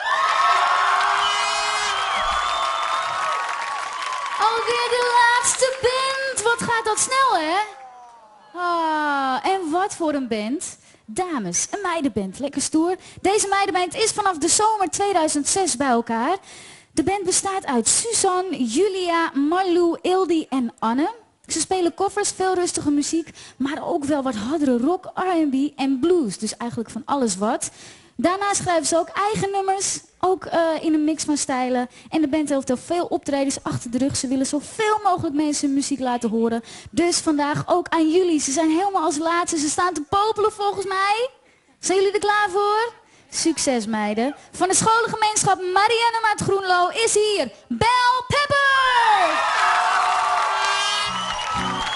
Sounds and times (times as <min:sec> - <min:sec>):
Speech: 0:08.6 - 0:16.4, 0:17.0 - 0:49.3.